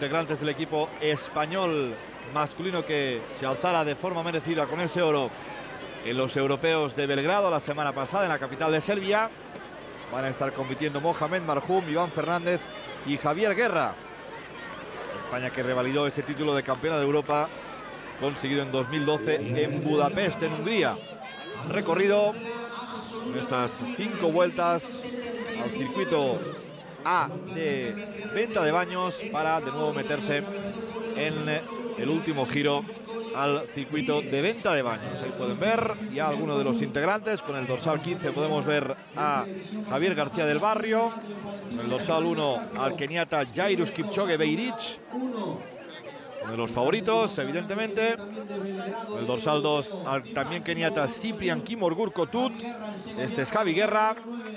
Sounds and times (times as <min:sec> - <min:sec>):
Speech: 0:18.2 - 0:21.0, 0:21.6 - 0:54.5.